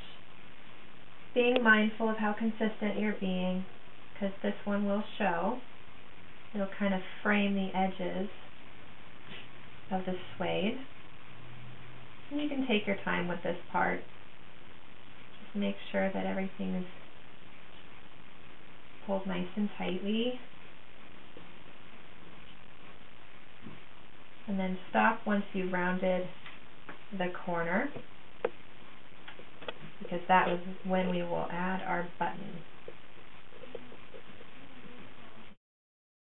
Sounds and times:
Inside, small room: 0:00.0 - 0:35.6
Speech: 0:01.4 - 0:05.6, 0:06.6 - 0:08.4, 0:09.9 - 0:10.9, 0:12.3 - 0:14.1, 0:15.5 - 0:17.0, 0:19.0 - 0:20.4, 0:24.5 - 0:26.4, 0:27.1 - 0:28.0, 0:30.0 - 0:32.6.

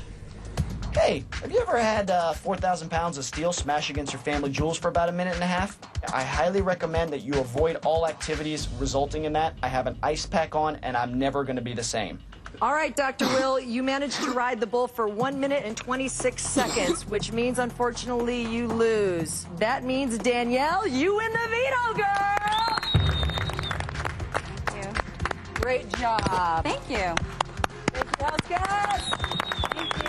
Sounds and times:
Music: 0:00.0 - 0:30.0.

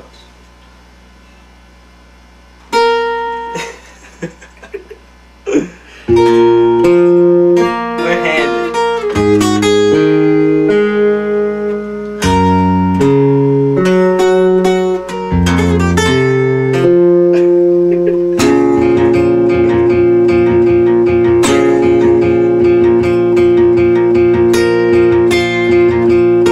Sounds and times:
Acoustic guitar: 0:02.7 - 0:03.8, 0:05.5 - 0:26.5
Strum: 0:05.5 - 0:26.5.

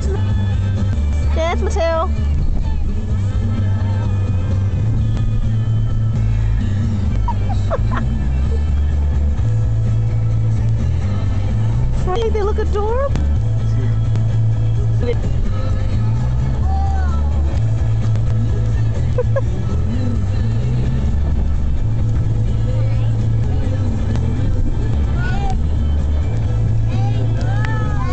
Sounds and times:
Car: 0:00.0 - 0:28.1
Music: 0:00.0 - 0:28.1.

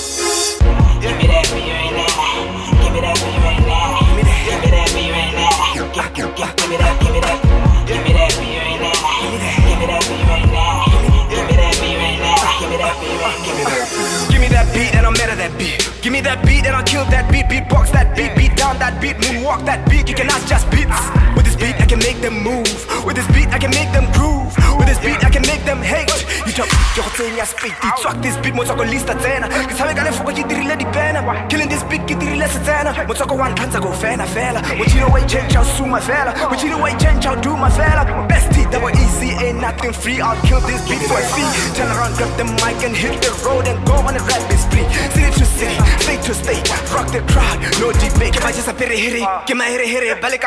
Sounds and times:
Music: 0:00.0 - 0:50.4.

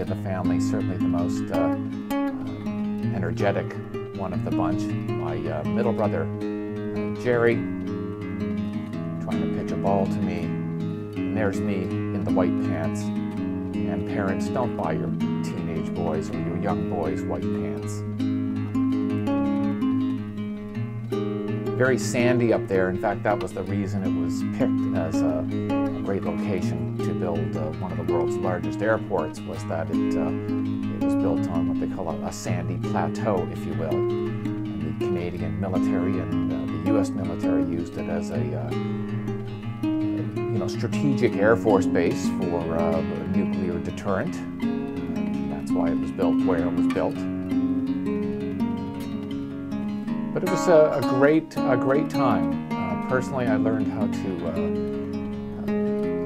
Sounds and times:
Speech: 0:00.0 - 0:01.8, 0:03.1 - 0:06.3, 0:07.2 - 0:07.6, 0:09.3 - 0:10.5, 0:11.3 - 0:13.1, 0:13.9 - 0:18.0, 0:21.8 - 0:30.4, 0:31.0 - 0:34.0, 0:34.8 - 0:38.8, 0:40.6 - 0:44.5, 0:45.5 - 0:47.3, 0:50.4 - 0:52.5, 0:53.1 - 0:54.7
Music: 0:00.0 - 0:56.2.

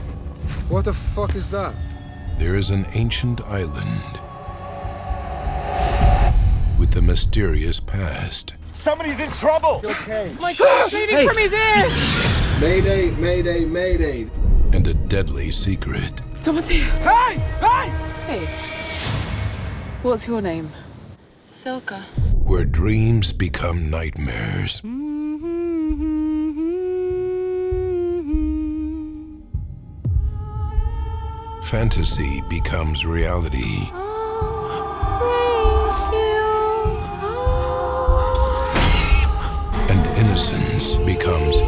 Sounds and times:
Music: 0:00.0 - 0:20.3, 0:24.9 - 0:41.6
Speech: 0:21.8 - 0:24.8, 0:39.8 - 0:41.6.

